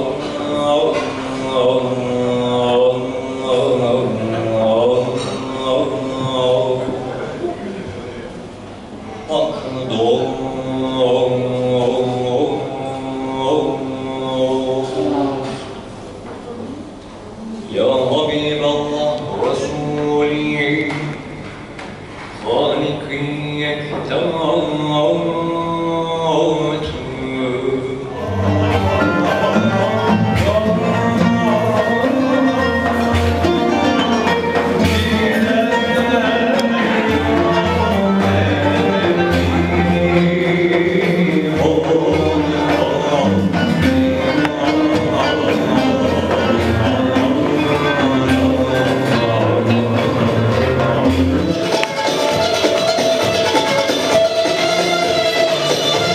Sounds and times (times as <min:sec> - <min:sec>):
Chant: 0:00.0 - 0:56.1.